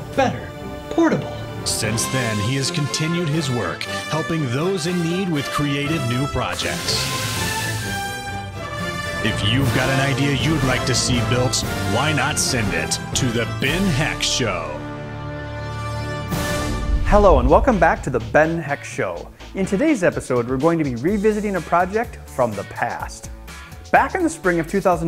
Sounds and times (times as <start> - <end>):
Music: 0.0 - 25.0
Speech: 0.1 - 7.1, 9.3 - 14.8, 17.1 - 23.3, 23.9 - 25.0.